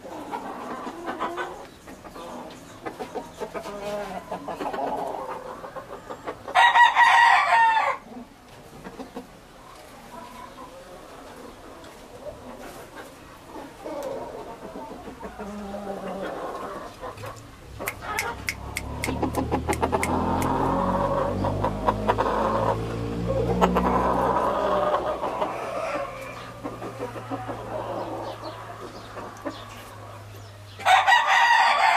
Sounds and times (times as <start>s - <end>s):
Chicken, rooster: 0.0s - 31.9s.